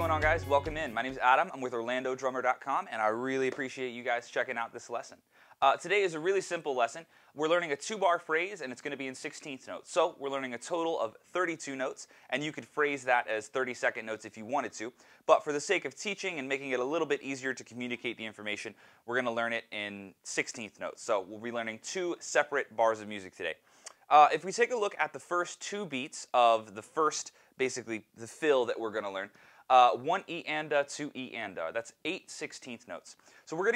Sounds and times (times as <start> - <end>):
Speech: 0.0 - 33.7.